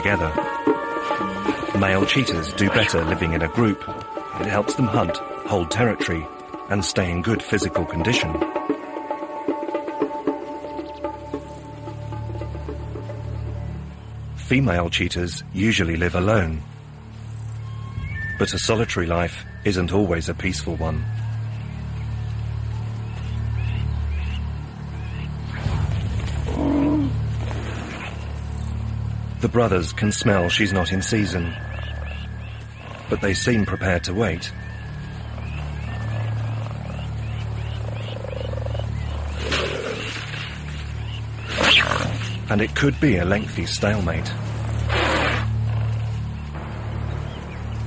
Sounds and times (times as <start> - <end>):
Music: 0.0 - 47.8
Speech: 1.7 - 8.4, 14.4 - 16.6, 18.4 - 21.0, 29.4 - 31.6, 33.1 - 34.6, 42.5 - 44.4.